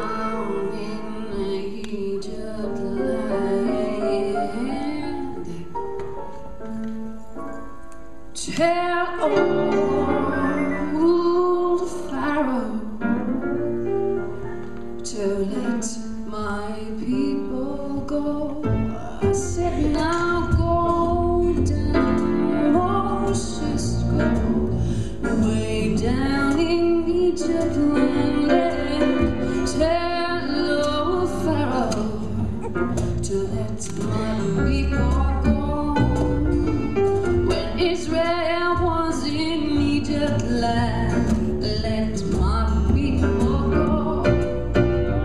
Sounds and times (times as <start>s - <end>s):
Female singing: 0.0s - 5.7s, 8.4s - 13.0s, 15.1s - 24.6s, 25.2s - 32.5s, 33.2s - 44.6s
Music: 0.0s - 45.2s.